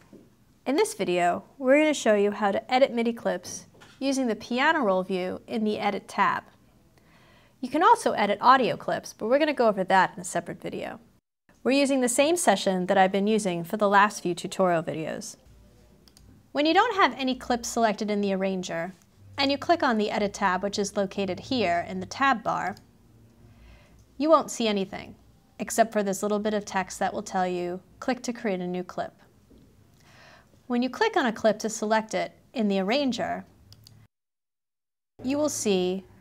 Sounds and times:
Speech: 0.7s - 6.6s, 7.6s - 22.8s, 24.2s - 29.3s, 30.7s - 33.5s, 35.2s - 36.2s.

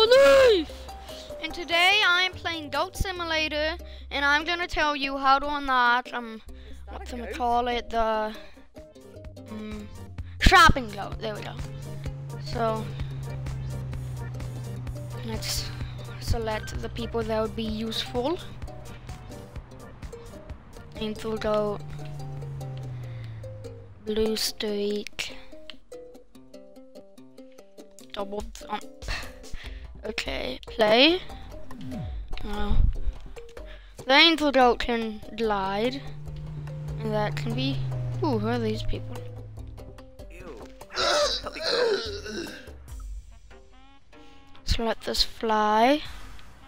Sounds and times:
Music: 0.0s - 46.6s
Speech: 1.4s - 8.4s, 10.4s - 11.6s, 28.2s - 28.9s, 30.0s - 31.2s, 44.7s - 46.1s.

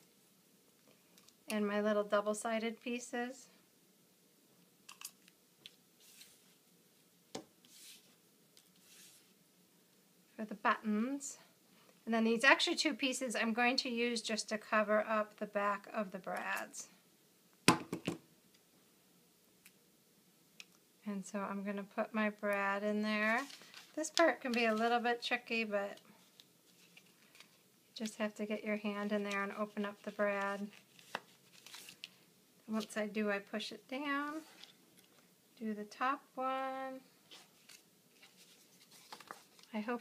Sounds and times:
Inside, small room: 0.0s - 40.0s
Speech: 1.5s - 3.6s, 12.1s - 17.0s, 21.0s - 26.0s, 28.0s - 30.8s, 32.7s - 34.5s, 35.6s - 37.1s, 39.7s - 40.0s.

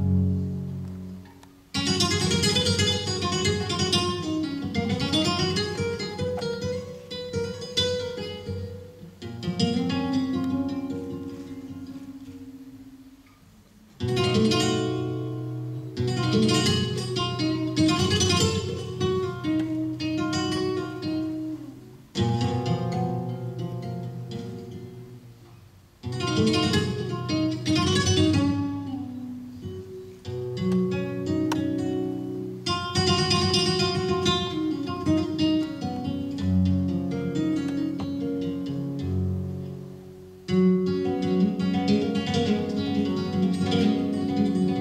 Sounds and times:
Guitar: 0.0s - 44.8s.

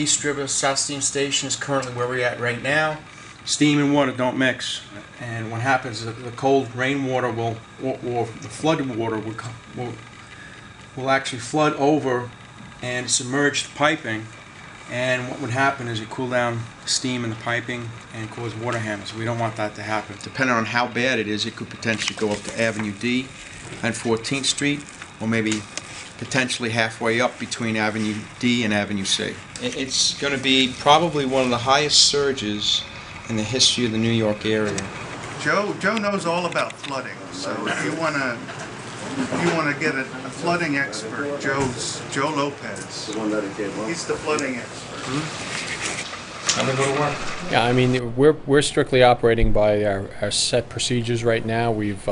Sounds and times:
Speech: 0.0s - 10.0s, 11.0s - 14.3s, 14.9s - 38.5s, 39.2s - 45.4s, 46.5s - 52.1s.

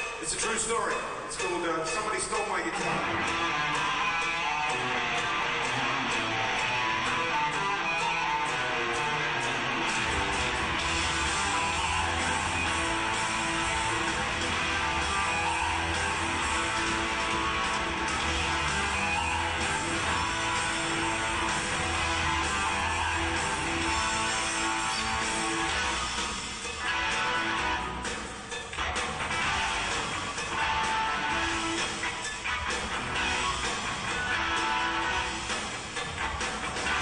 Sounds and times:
Bass guitar: 2.9s - 37.0s.

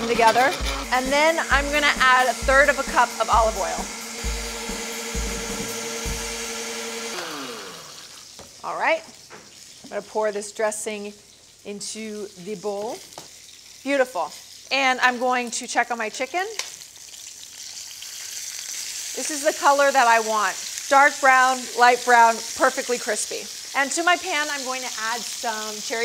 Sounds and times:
Speech: 0.0s - 3.8s, 8.7s - 9.1s, 13.9s - 16.6s, 19.2s - 26.0s
Frying (food): 6.4s - 26.0s.

